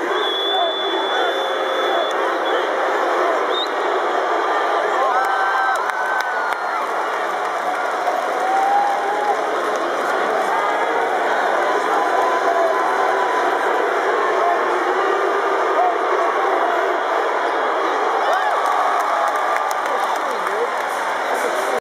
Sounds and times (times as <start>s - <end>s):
Speech: 19.8s - 21.8s.